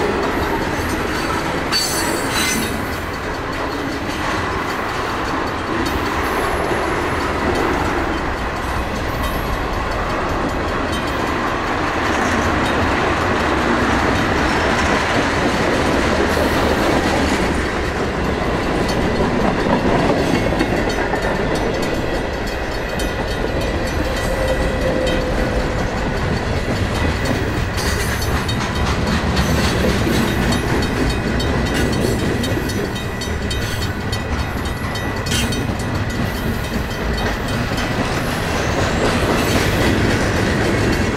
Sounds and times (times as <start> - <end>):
Clickety-clack: 0.0 - 41.1
Railroad car, train wagon: 0.0 - 41.1
Train: 0.0 - 41.1.